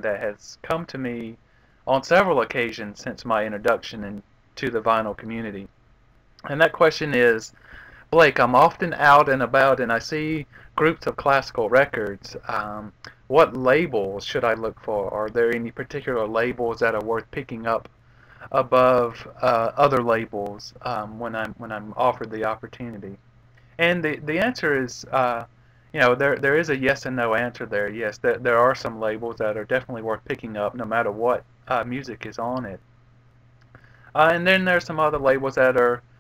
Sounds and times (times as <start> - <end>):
Speech: 0.0 - 5.7, 6.4 - 7.5, 8.1 - 17.9, 18.5 - 23.2, 23.8 - 32.8, 34.2 - 36.0.